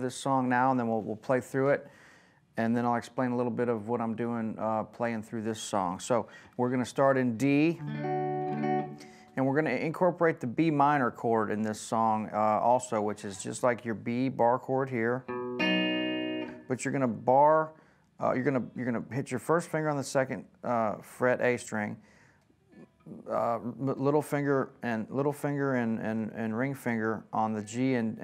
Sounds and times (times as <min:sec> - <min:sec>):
Speech: 0:00.0 - 0:01.9, 0:02.6 - 0:07.8, 0:09.4 - 0:15.3, 0:16.7 - 0:22.0, 0:22.8 - 0:28.2
Electric guitar: 0:07.8 - 0:09.4, 0:15.2 - 0:16.7.